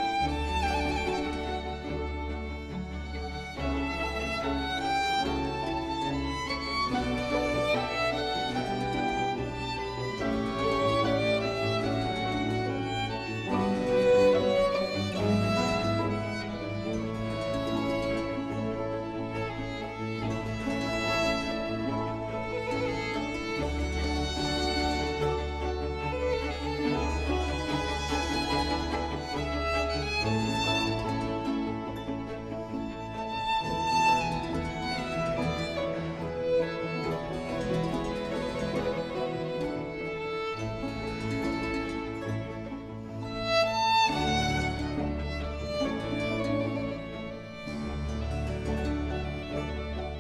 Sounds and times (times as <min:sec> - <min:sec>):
Orchestra: 0:00.0 - 0:50.2
Violin, fiddle: 0:00.0 - 0:50.2.